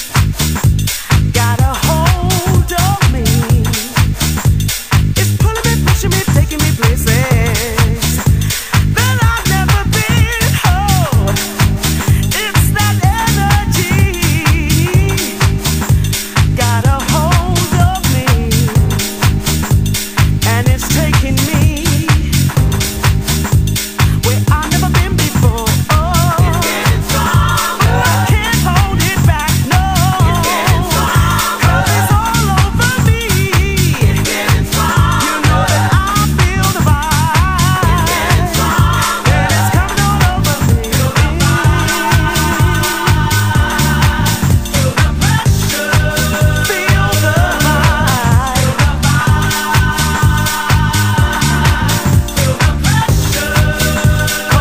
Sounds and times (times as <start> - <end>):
Funk: 0.0 - 54.6.